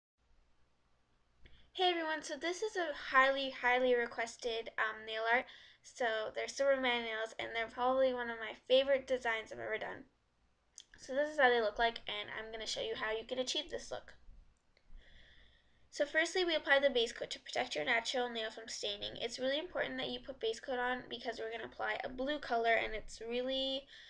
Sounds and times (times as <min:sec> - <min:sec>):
Speech: 0:01.8 - 0:10.0, 0:10.8 - 0:14.2, 0:16.0 - 0:24.0.